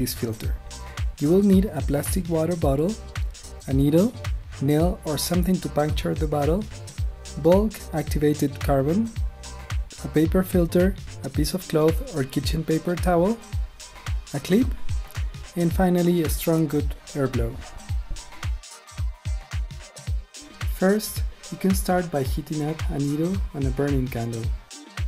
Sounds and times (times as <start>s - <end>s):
Speech: 0.0s - 0.6s, 1.2s - 3.0s, 3.7s - 6.7s, 7.4s - 9.2s, 10.0s - 13.4s, 14.3s - 14.8s, 15.5s - 17.7s, 20.7s - 24.6s
Music: 0.0s - 25.0s.